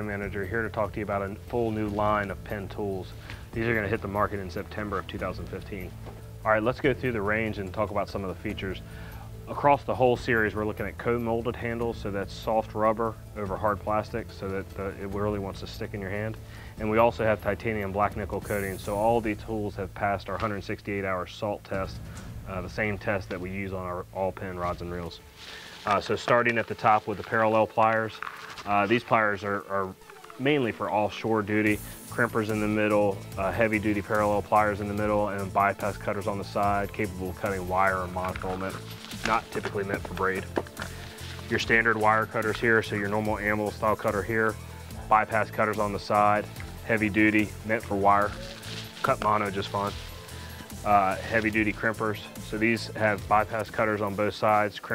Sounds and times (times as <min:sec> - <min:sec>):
Speech: 0:00.0 - 0:05.9, 0:06.5 - 0:08.8, 0:09.5 - 0:25.2, 0:25.9 - 0:40.6, 0:41.5 - 0:50.0, 0:50.8 - 0:54.9
Music: 0:00.0 - 0:54.9.